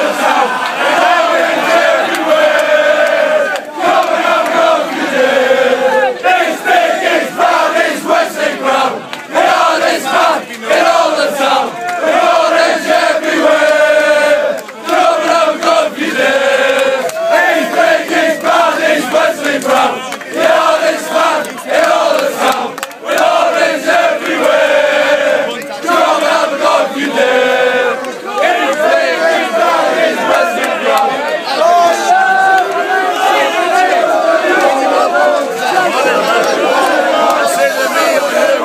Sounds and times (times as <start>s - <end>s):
Speech: 25.4s - 26.1s, 30.2s - 38.6s.